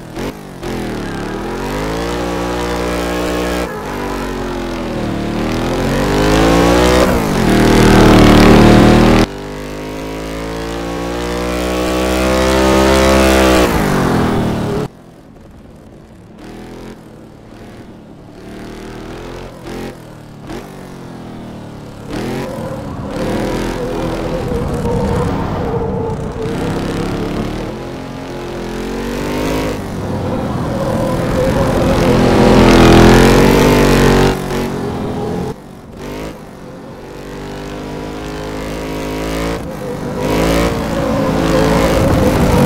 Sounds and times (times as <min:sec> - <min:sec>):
Vehicle: 0:00.0 - 0:42.6.